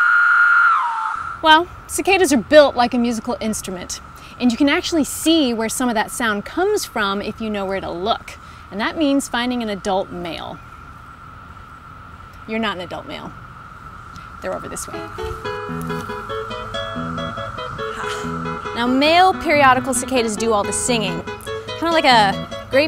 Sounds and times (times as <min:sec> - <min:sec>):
Speech: 0:01.4 - 0:10.6, 0:12.5 - 0:13.3, 0:14.4 - 0:15.1, 0:18.8 - 0:21.2
Music: 0:14.9 - 0:22.8.